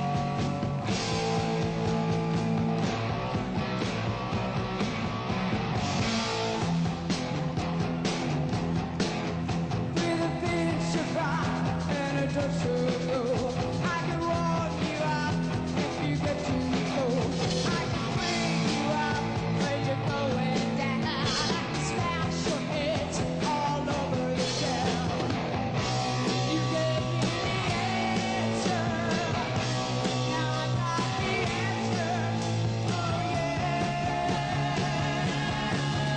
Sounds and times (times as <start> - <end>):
Music: 0.0 - 36.1.